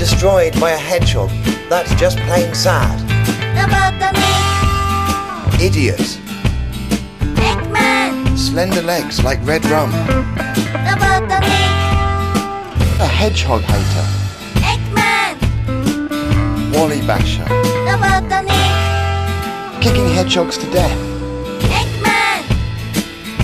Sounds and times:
Speech: 0:00.0 - 0:03.0, 0:05.6 - 0:06.2, 0:08.4 - 0:10.0, 0:13.0 - 0:14.1, 0:16.7 - 0:17.6, 0:19.8 - 0:21.0
Music: 0:00.0 - 0:23.4.

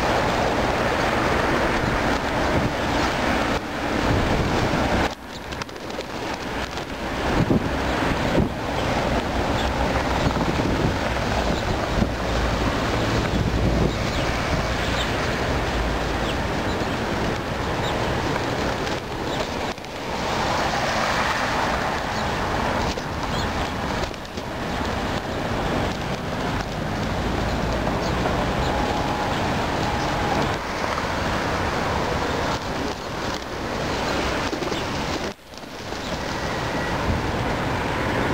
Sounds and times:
Outside, rural or natural: 0:00.0 - 0:38.3
Pigeon, dove: 0:32.6 - 0:36.6.

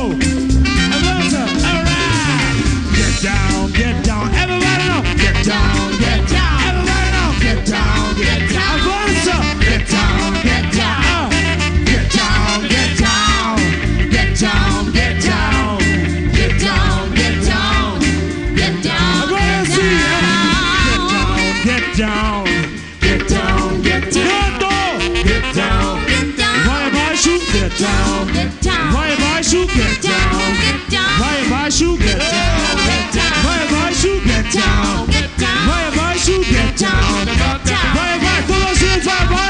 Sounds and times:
Funk: 0:00.0 - 0:39.4.

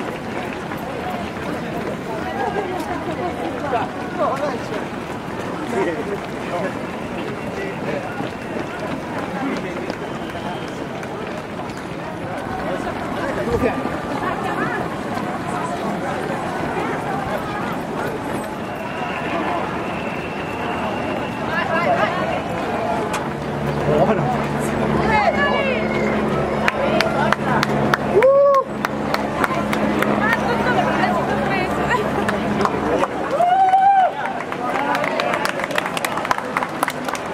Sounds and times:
Hubbub, speech noise, speech babble: 0:00.0 - 0:37.3
Run: 0:00.0 - 0:37.3.

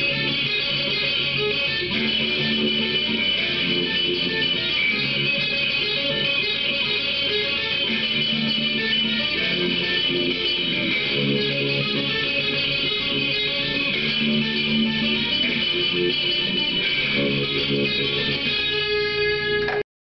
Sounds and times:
Bass guitar: 0:00.0 - 0:19.8.

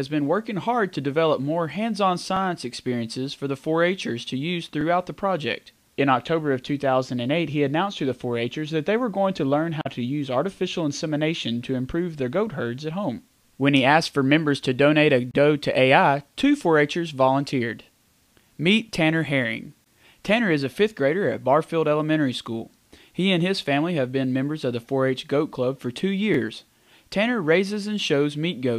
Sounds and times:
Speech: 0:00.0 - 0:17.9, 0:18.6 - 0:28.7.

